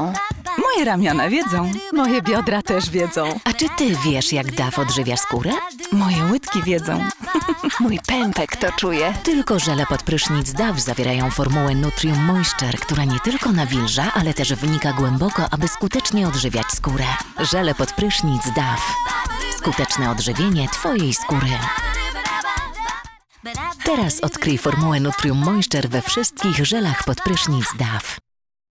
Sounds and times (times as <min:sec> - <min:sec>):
Speech: 0:00.0 - 0:21.8, 0:23.8 - 0:28.2
Music: 0:00.0 - 0:28.2.